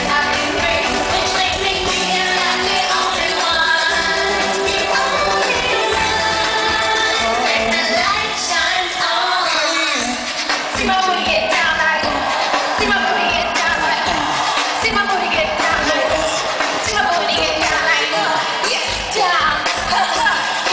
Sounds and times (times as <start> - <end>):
Music: 0.0 - 20.7.